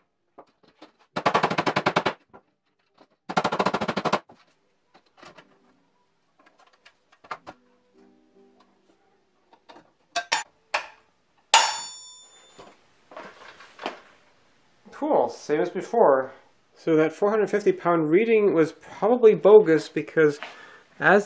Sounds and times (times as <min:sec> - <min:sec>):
Music: 0:07.2 - 0:09.6
Tools: 0:09.6 - 0:11.0.